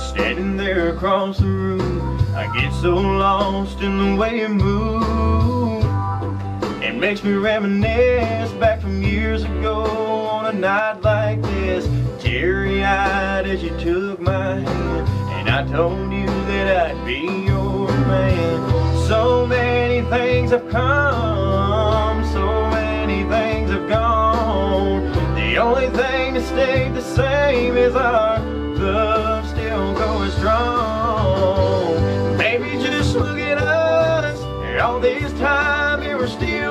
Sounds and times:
Male singing: 0.0s - 6.0s, 6.8s - 36.7s
Music: 0.0s - 36.7s.

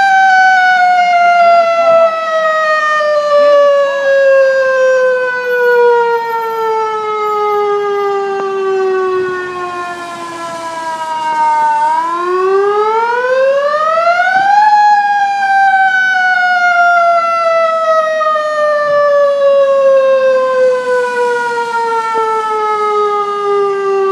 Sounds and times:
Fire engine, fire truck (siren): 0.0s - 24.1s.

